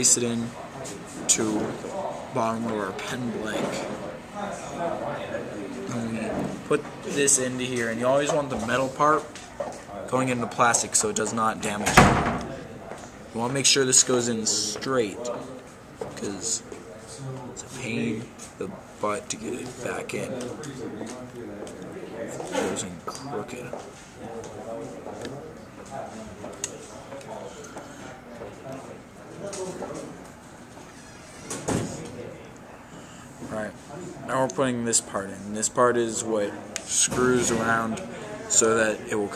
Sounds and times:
Speech: 0.0 - 9.3, 9.9 - 30.3, 33.4 - 39.3.

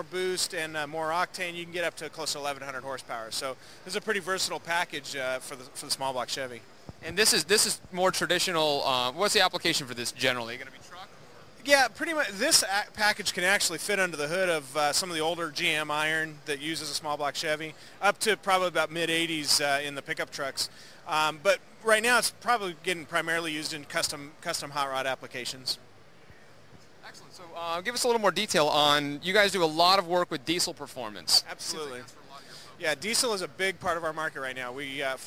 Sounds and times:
Speech: 0.0 - 25.8, 27.0 - 35.2.

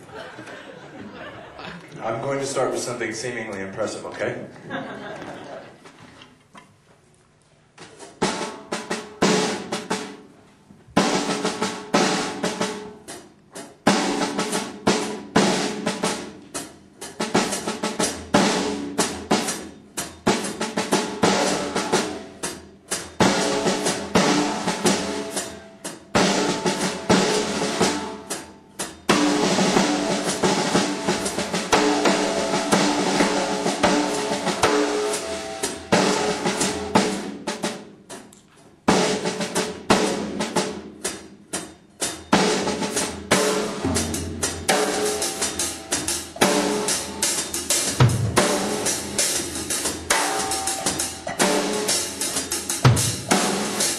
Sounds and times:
Speech: 2.0 - 4.6
Drum kit: 7.7 - 53.9.

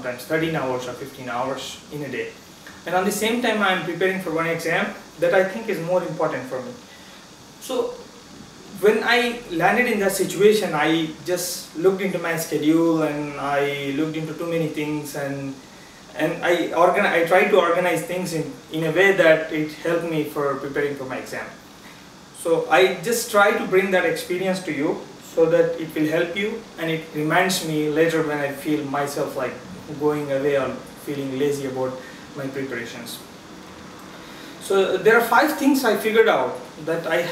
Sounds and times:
Speech: 0.0 - 6.8, 7.6 - 8.0, 8.7 - 21.6, 22.4 - 33.3, 34.6 - 37.3
Inside, small room: 0.0 - 37.3.

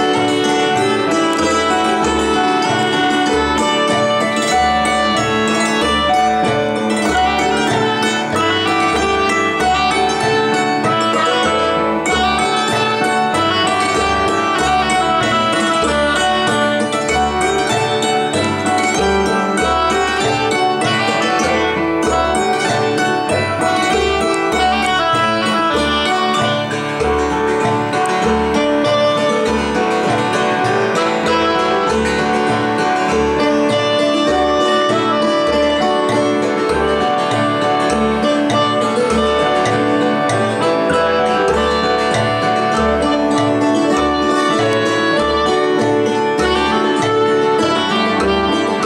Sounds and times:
Keyboard (musical): 0.0 - 48.8.

